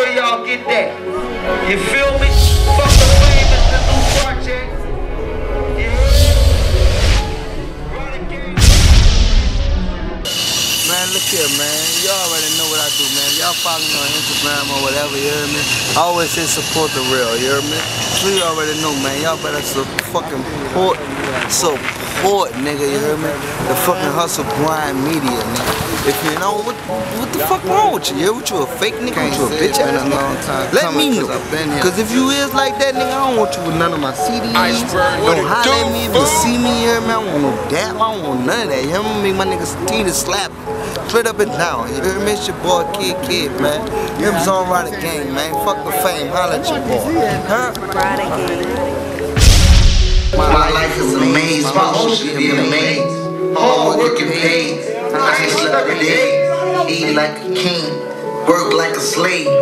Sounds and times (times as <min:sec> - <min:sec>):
Speech: 0:10.9 - 0:40.5, 0:41.1 - 0:48.8.